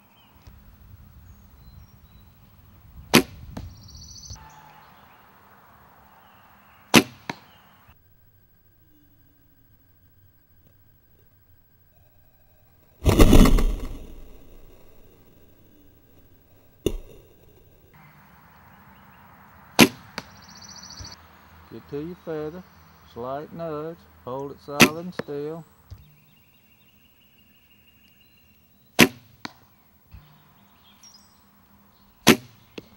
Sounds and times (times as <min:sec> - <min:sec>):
Arrow: 0:03.1 - 0:03.7, 0:06.9 - 0:07.5, 0:13.0 - 0:15.1, 0:16.8 - 0:17.3, 0:19.8 - 0:20.4, 0:24.8 - 0:25.0, 0:29.0 - 0:29.6, 0:32.2 - 0:32.6.